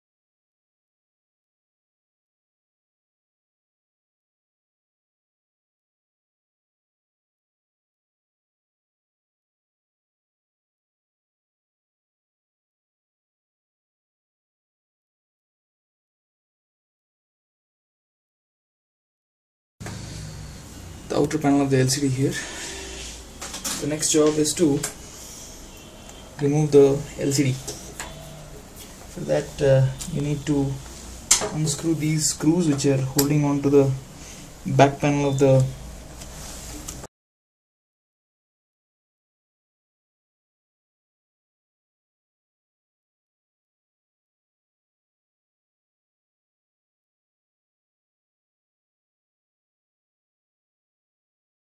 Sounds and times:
Inside, small room: 19.8s - 37.1s
Speech: 21.1s - 22.5s, 23.7s - 25.0s, 26.4s - 27.8s, 29.2s - 34.0s, 34.6s - 35.8s.

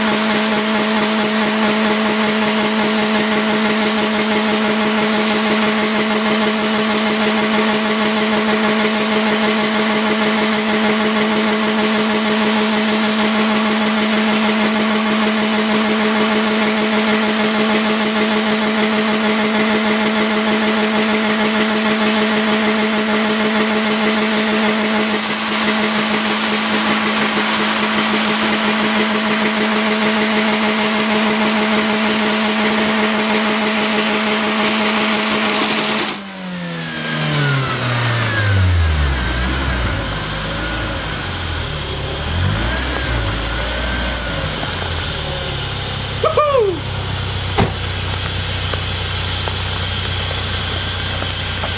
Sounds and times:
Car: 0.0s - 51.7s.

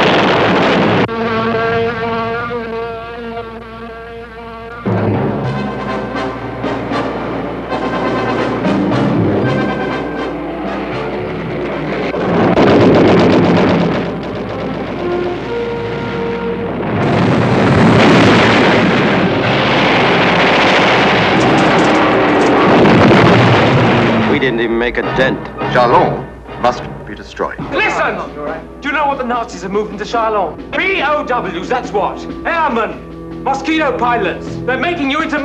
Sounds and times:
Music: 0.1s - 18.3s, 23.5s - 35.4s.

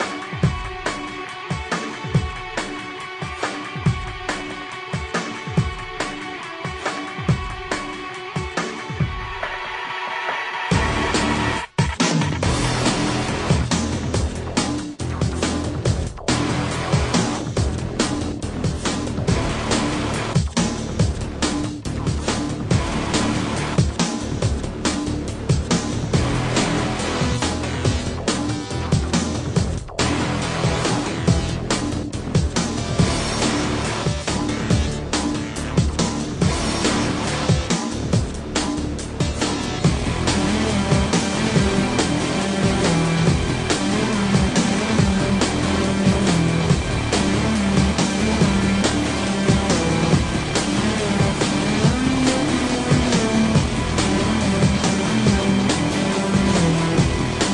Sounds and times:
Soundtrack music: 0.0s - 57.5s.

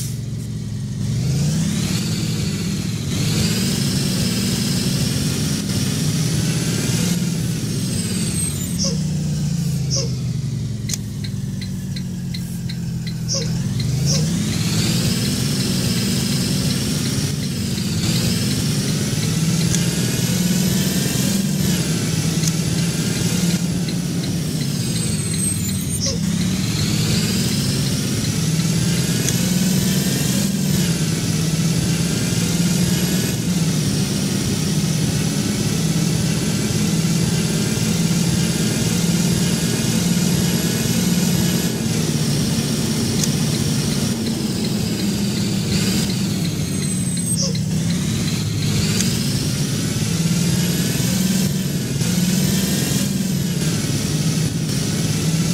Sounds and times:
Bus: 0.0s - 55.5s.

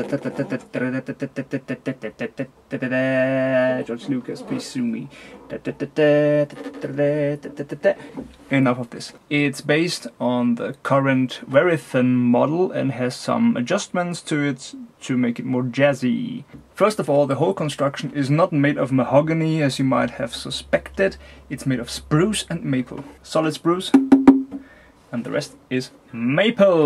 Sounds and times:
Speech: 0.0s - 24.0s, 25.1s - 26.8s.

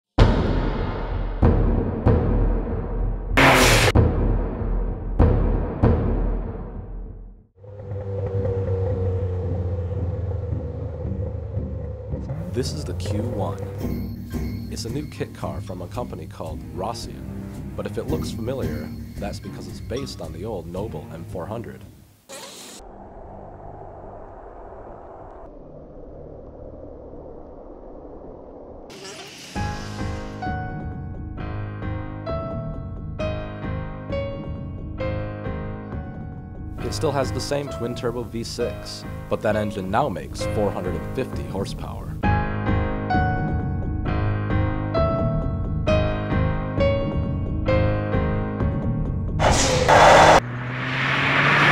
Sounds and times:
Timpani: 0.2s - 7.1s
Car: 3.4s - 4.0s, 7.6s - 14.3s, 49.3s - 51.7s.

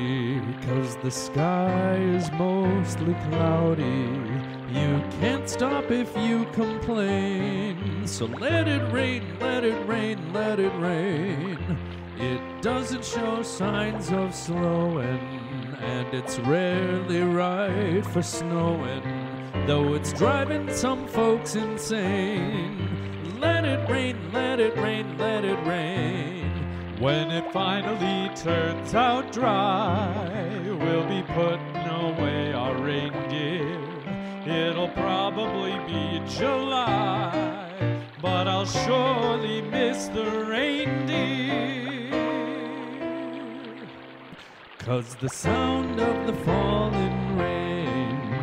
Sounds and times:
Music: 0.0s - 48.4s
Raindrop: 0.0s - 48.4s.

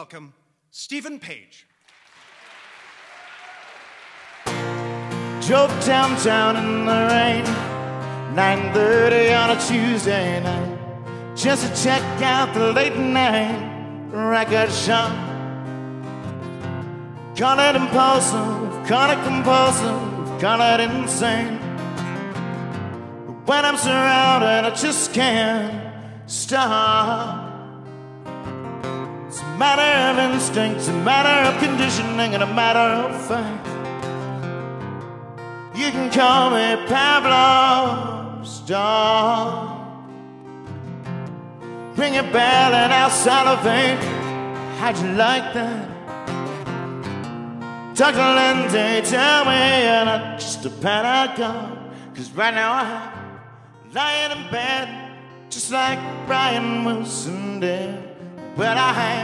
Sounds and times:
Music: 4.3s - 59.2s.

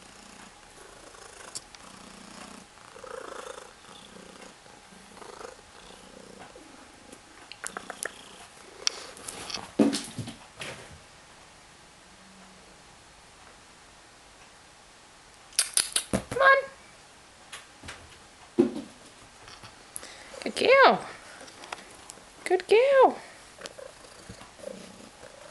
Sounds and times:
Speech: 16.4s - 16.8s, 20.4s - 21.1s, 22.4s - 23.4s.

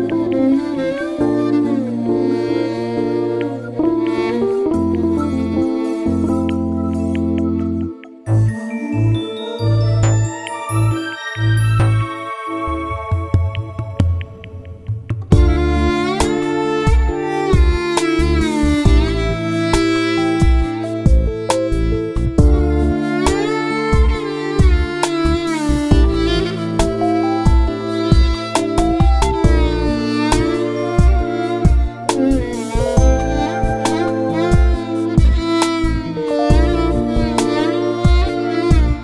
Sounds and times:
Violin, fiddle: 0.0s - 8.1s, 15.3s - 39.0s.

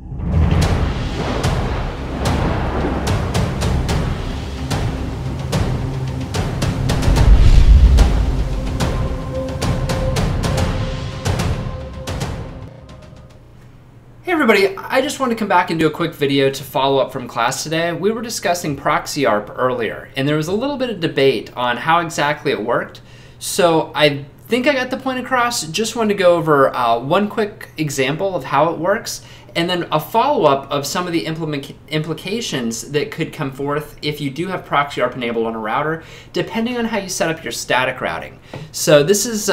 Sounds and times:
Speech: 14.2s - 39.5s.

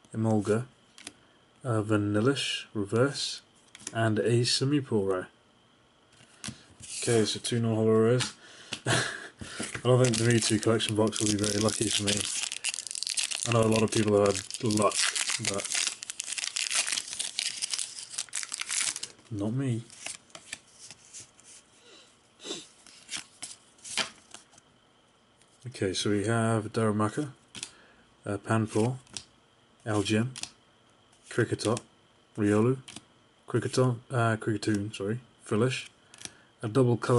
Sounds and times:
Inside, small room: 0.0s - 37.1s
Speech: 0.1s - 0.7s, 1.6s - 5.4s, 7.0s - 8.4s, 9.8s - 12.3s, 13.5s - 15.7s, 19.3s - 19.9s, 25.6s - 27.4s, 28.2s - 29.0s, 29.8s - 30.4s, 31.3s - 32.9s, 33.5s - 35.9s, 36.6s - 37.1s.

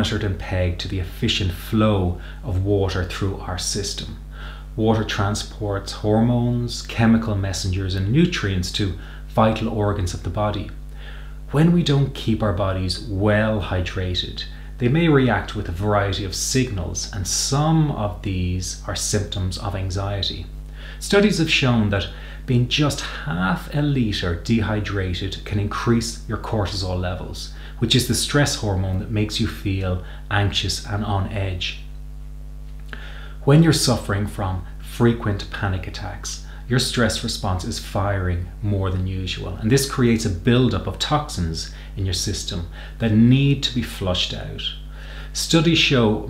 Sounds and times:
Speech: 0.0s - 10.8s, 11.5s - 31.9s, 33.4s - 46.2s.

